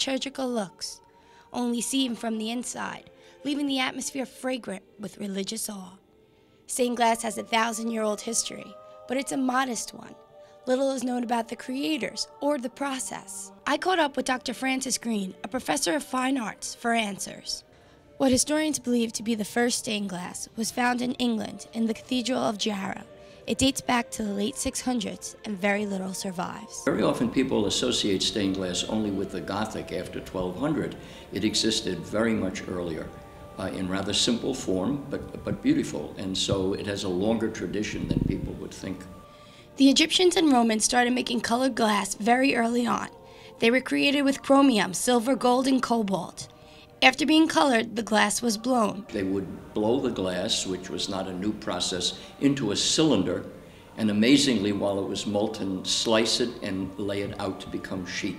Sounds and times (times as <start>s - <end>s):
Speech: 0.0s - 1.0s, 1.6s - 6.0s, 6.7s - 17.6s, 18.2s - 39.2s, 39.8s - 58.3s
Music: 0.0s - 58.3s.